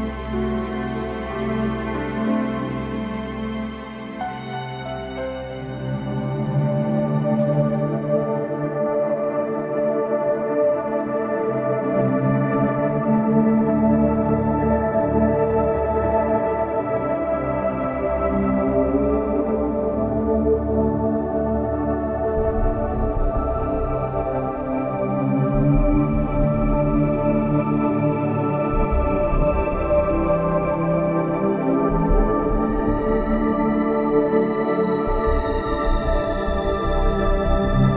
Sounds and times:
Ambient music: 0.0 - 37.9.

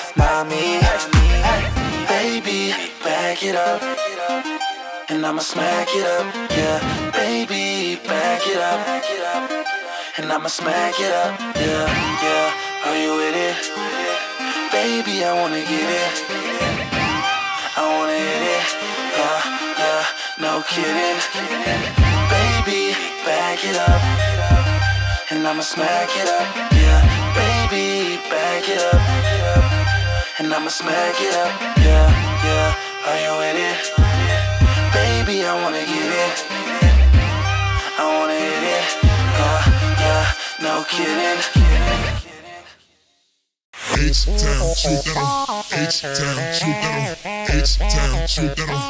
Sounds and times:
Music: 0.0 - 42.4, 43.9 - 48.8.

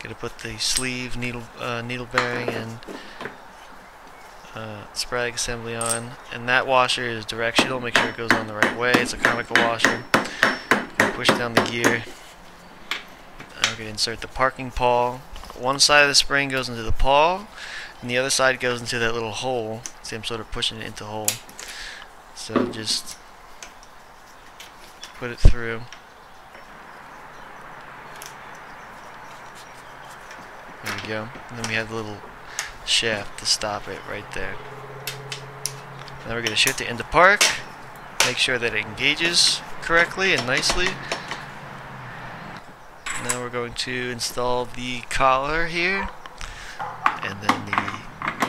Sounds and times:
Speech: 0.0 - 2.8, 4.5 - 10.1, 11.1 - 12.1, 13.6 - 21.4, 22.4 - 23.2, 25.2 - 25.9, 30.9 - 32.2, 32.9 - 34.6, 36.2 - 37.6, 38.2 - 41.0, 43.2 - 46.2, 47.2 - 48.1.

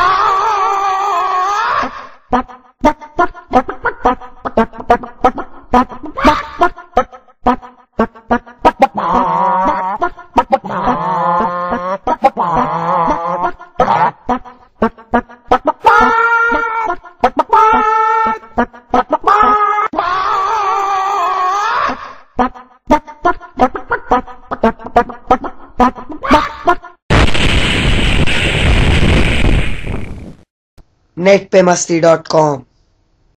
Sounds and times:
Speech: 31.2 - 32.7.

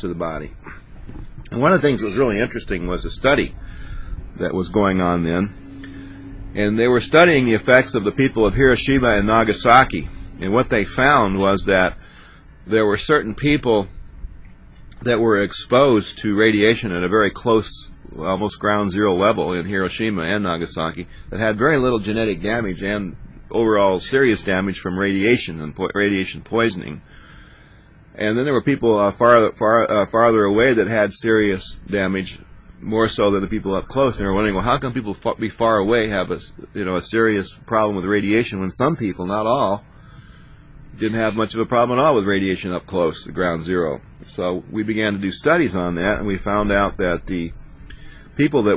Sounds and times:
Speech: 0.0 - 0.9, 1.5 - 12.0, 12.6 - 14.0, 15.0 - 27.1, 28.2 - 39.9, 40.9 - 47.6, 48.4 - 48.7.

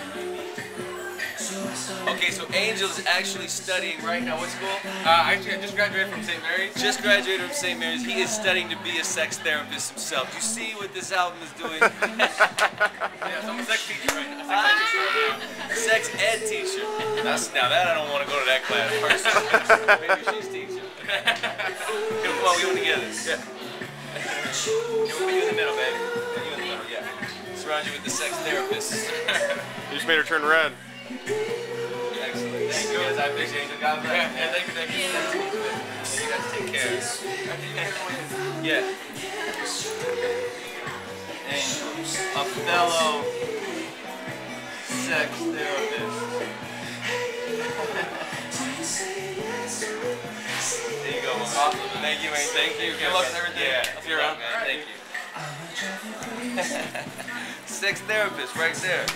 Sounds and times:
Music: 0.0 - 59.1.

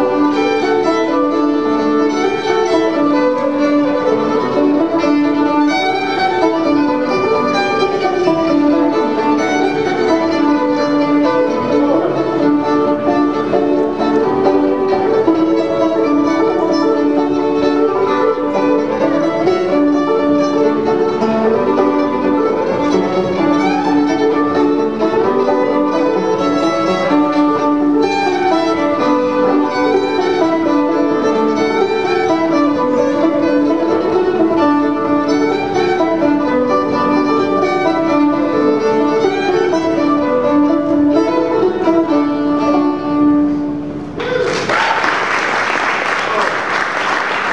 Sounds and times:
Banjo: 0.0 - 43.3
String section: 0.0 - 47.5.

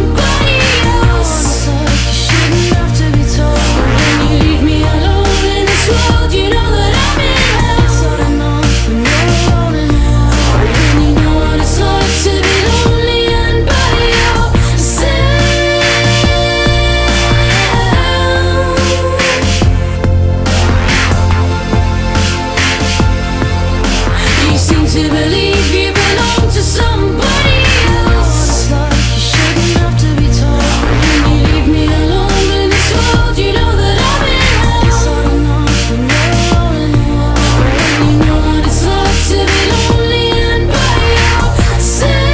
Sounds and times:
Trance music: 0.0 - 42.3.

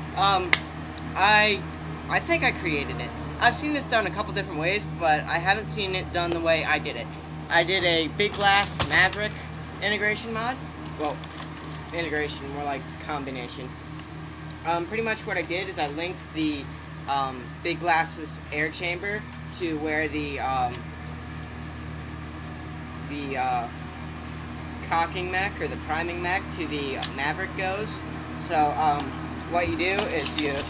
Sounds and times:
Speech: 0.2 - 0.6, 1.2 - 11.2, 11.9 - 13.7, 14.7 - 20.8, 23.1 - 23.8, 24.8 - 30.6.

